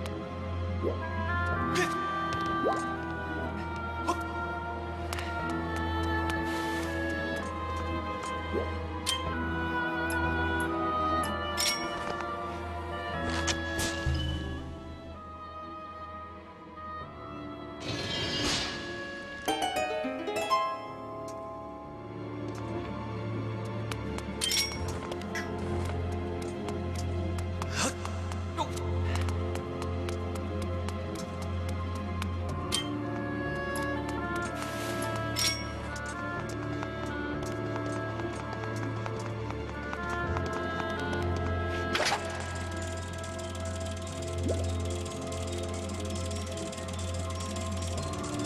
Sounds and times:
Music: 0.0s - 48.4s.

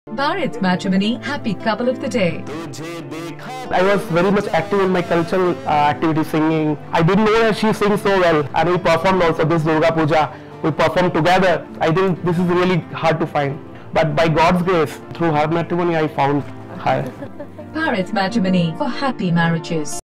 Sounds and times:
Music: 0.1s - 20.0s.

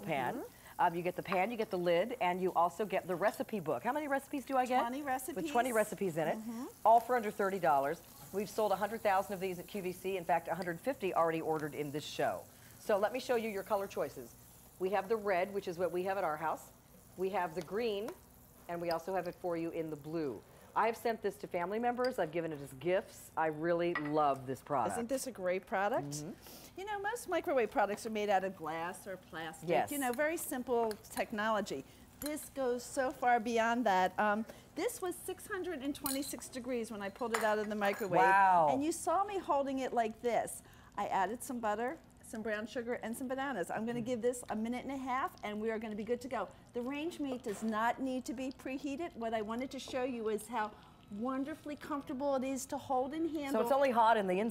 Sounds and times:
Sizzle: 0.0s - 54.5s.

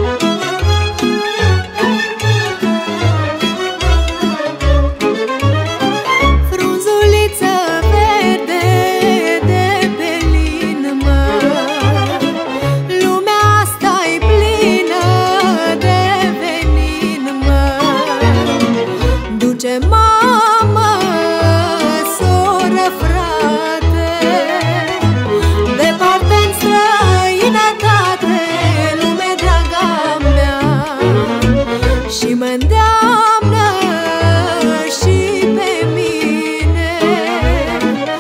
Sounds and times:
Soul music: 0.0s - 38.2s.

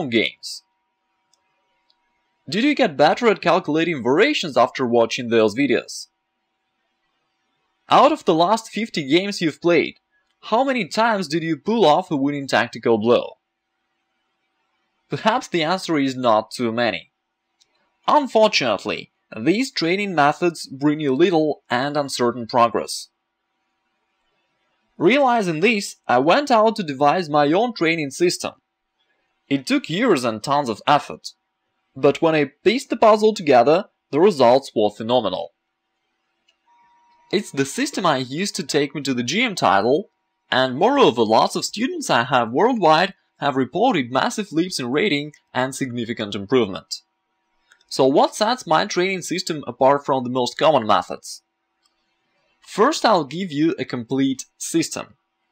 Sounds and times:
Speech: 0.0s - 0.6s, 2.5s - 6.1s, 7.9s - 13.4s, 15.2s - 17.0s, 18.1s - 23.1s, 25.0s - 28.6s, 29.5s - 31.3s, 32.0s - 35.5s, 37.4s - 47.0s, 47.9s - 51.4s, 52.7s - 55.1s.

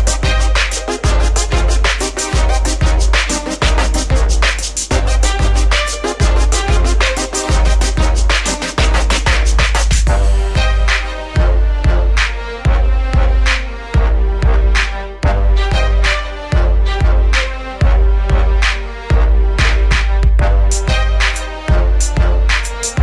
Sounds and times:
Music: 0.0s - 23.0s.

